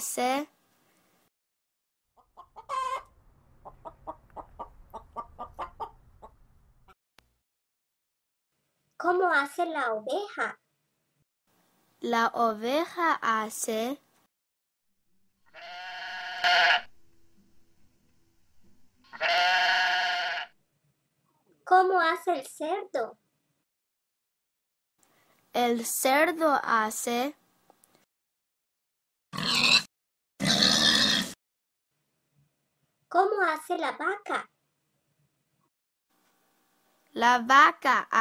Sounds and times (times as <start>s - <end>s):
Speech: 0.0s - 0.5s, 9.0s - 10.6s, 12.0s - 14.0s, 21.7s - 23.2s, 25.6s - 27.4s, 33.1s - 34.5s, 37.1s - 38.2s.